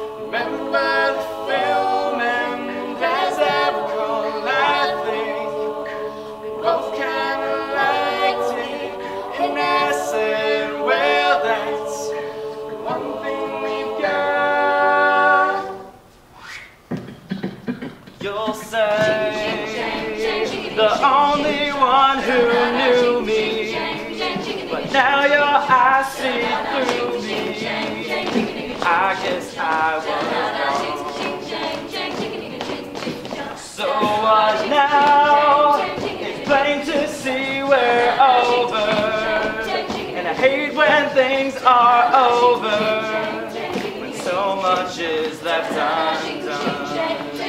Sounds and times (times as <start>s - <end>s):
Choir: 0.0s - 16.0s, 18.2s - 47.4s
A capella: 0.0s - 16.1s, 17.0s - 47.4s.